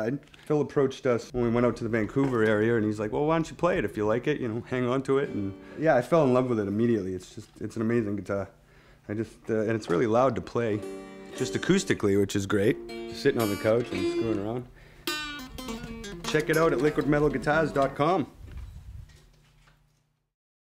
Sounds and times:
Speech: 0:00.0 - 0:10.8, 0:11.4 - 0:14.7, 0:16.3 - 0:18.4
Music: 0:04.8 - 0:06.6, 0:10.6 - 0:18.3.

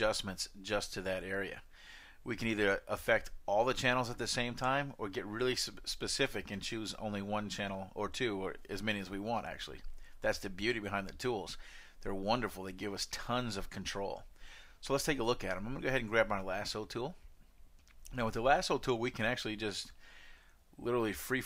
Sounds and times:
Speech: 0:00.0 - 0:01.6, 0:02.3 - 0:17.2, 0:18.1 - 0:20.0, 0:20.8 - 0:21.4.

